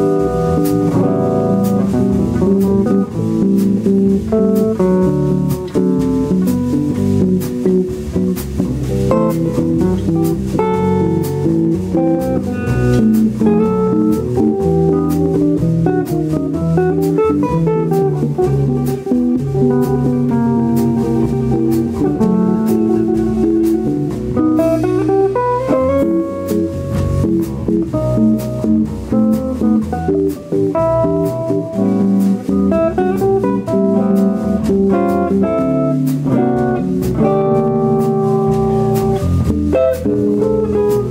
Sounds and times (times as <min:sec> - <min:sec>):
Electric guitar: 0:00.0 - 0:41.1
Strum: 0:00.0 - 0:41.1.